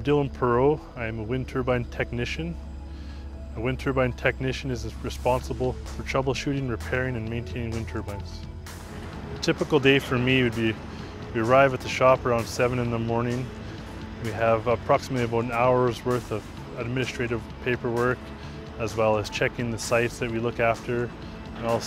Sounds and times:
Speech: 0.0 - 2.6, 3.6 - 8.4, 9.4 - 10.8, 11.4 - 13.5, 14.2 - 18.2, 18.8 - 21.8
Music: 0.0 - 21.8.

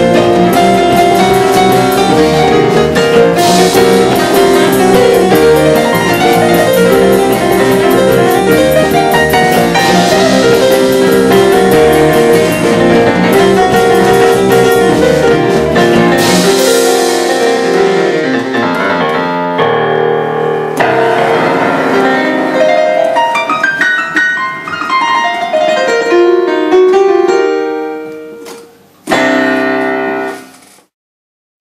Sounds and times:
Electric piano: 0.0 - 30.9.

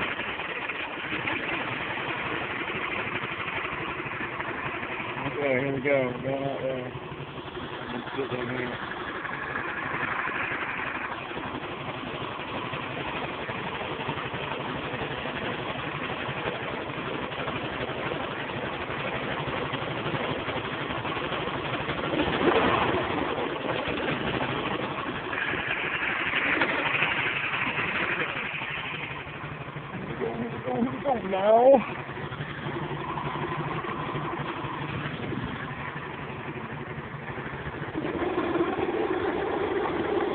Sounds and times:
Gurgling: 22.2 - 24.4, 37.9 - 40.3.

